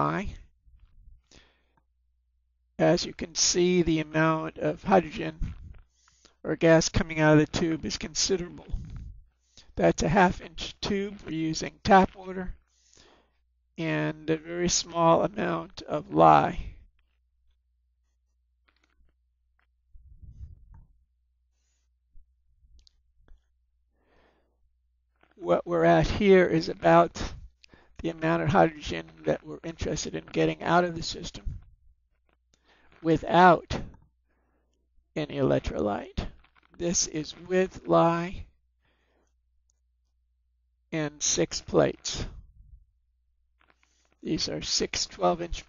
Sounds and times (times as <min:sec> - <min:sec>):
Speech: 0:00.0 - 0:00.4, 0:02.8 - 0:05.6, 0:06.5 - 0:09.0, 0:09.8 - 0:12.6, 0:13.8 - 0:16.8, 0:25.4 - 0:31.6, 0:33.0 - 0:33.9, 0:35.2 - 0:38.5, 0:41.0 - 0:42.4, 0:44.2 - 0:45.6.